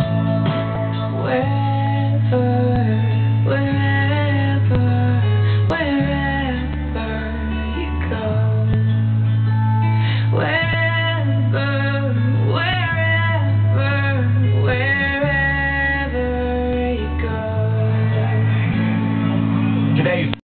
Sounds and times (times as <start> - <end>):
Music: 0.0 - 20.4
Speech: 19.9 - 20.4.